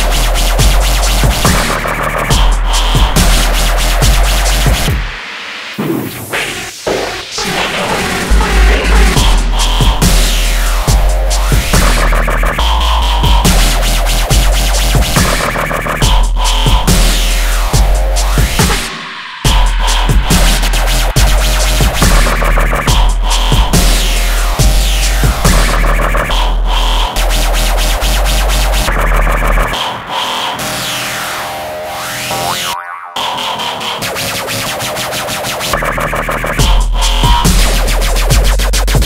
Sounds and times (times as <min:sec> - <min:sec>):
Dubstep: 0:00.0 - 0:39.0.